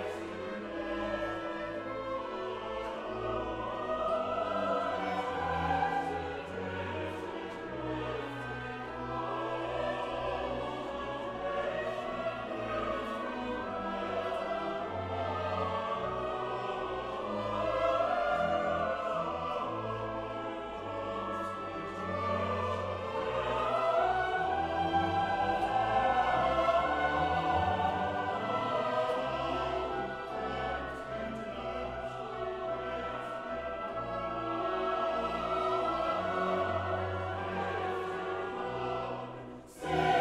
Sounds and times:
Music: 0.0s - 40.2s.

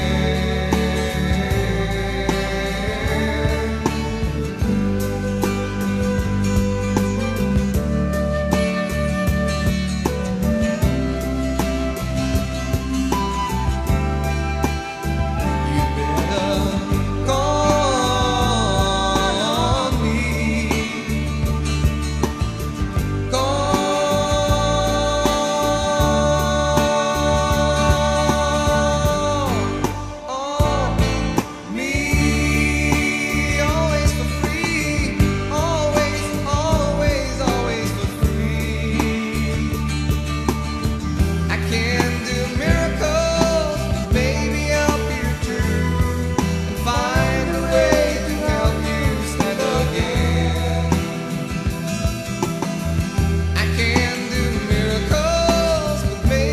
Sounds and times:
Country: 0.0s - 56.5s.

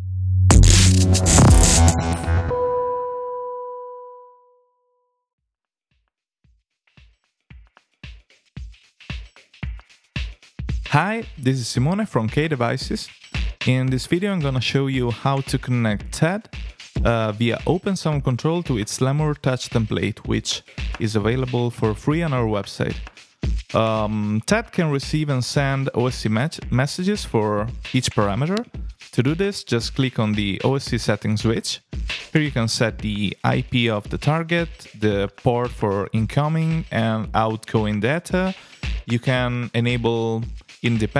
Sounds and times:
Music: 0.0s - 5.2s, 6.0s - 41.1s
Speech: 10.9s - 23.0s, 23.7s - 41.1s.

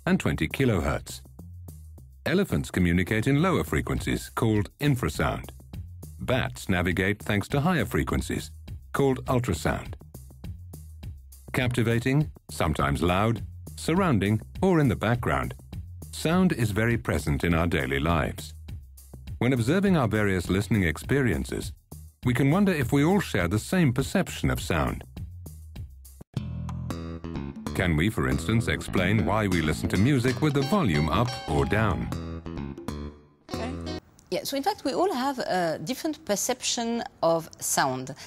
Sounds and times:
Speech: 0.0s - 1.2s, 2.3s - 5.5s, 6.2s - 10.0s, 11.5s - 18.6s, 19.4s - 25.1s, 27.8s - 32.1s, 33.5s - 38.2s
Music: 0.0s - 34.0s.

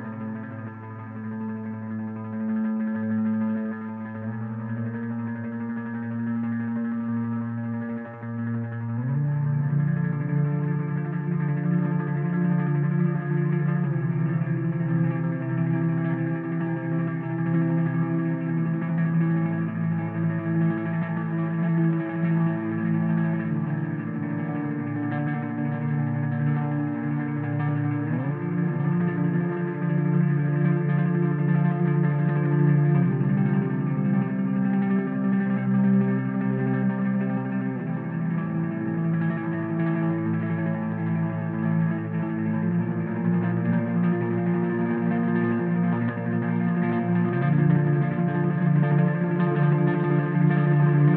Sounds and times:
Music: 0.0s - 51.1s.

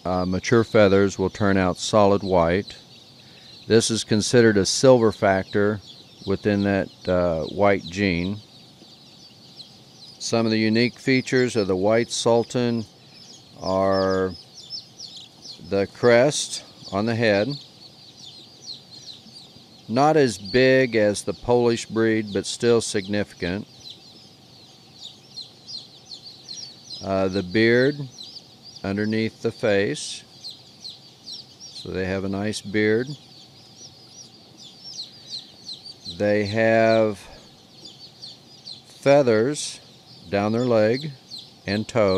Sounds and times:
Speech: 0.1s - 2.8s, 3.7s - 8.4s, 10.2s - 12.9s, 13.6s - 14.4s, 15.6s - 17.6s, 19.9s - 23.7s, 27.0s - 28.1s, 28.8s - 30.2s, 31.8s - 33.2s, 36.1s - 37.4s, 38.9s - 42.1s.

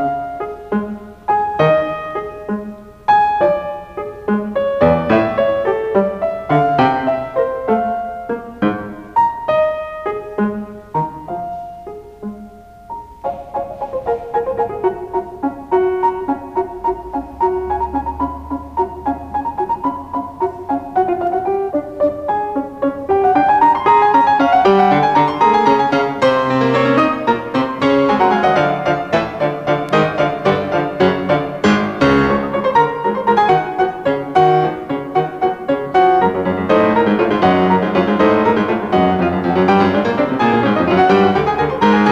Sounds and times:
Classical music: 0.0s - 42.1s
Piano: 0.0s - 42.1s.

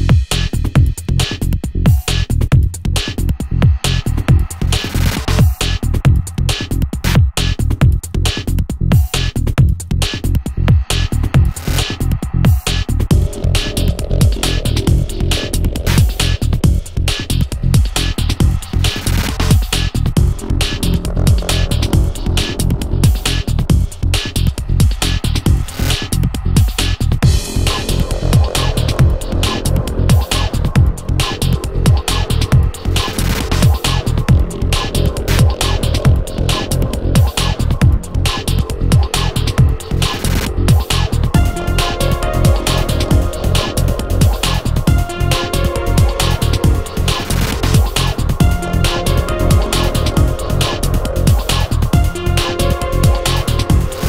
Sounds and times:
Music: 0.0s - 54.0s.

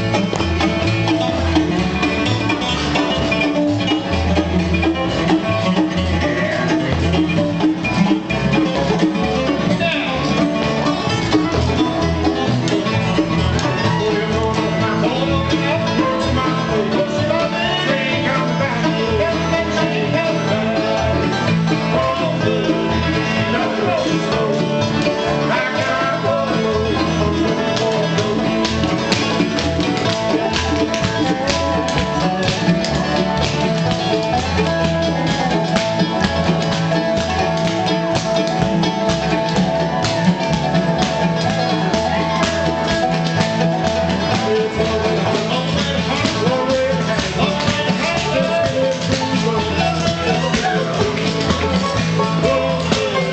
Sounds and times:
Bluegrass: 0.0s - 53.3s.

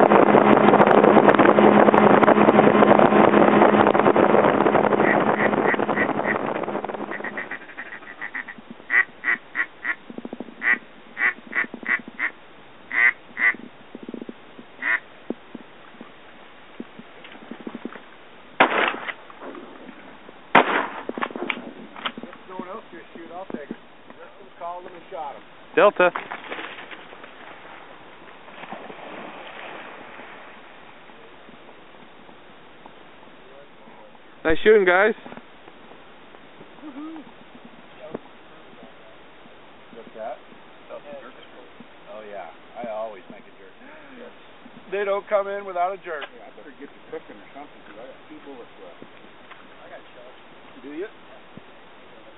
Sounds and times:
Quack: 5.0s - 6.4s, 7.1s - 10.0s, 10.6s - 13.6s, 14.8s - 15.0s.

